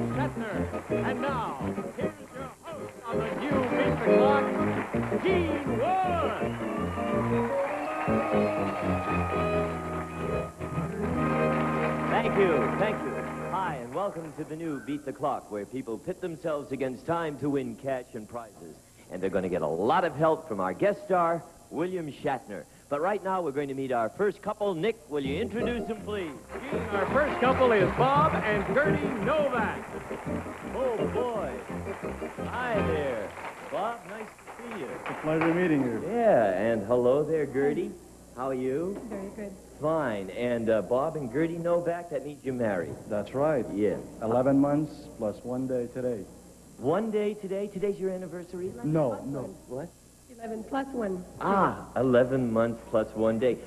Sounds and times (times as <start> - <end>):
Music: 0.0 - 14.5, 25.2 - 34.0.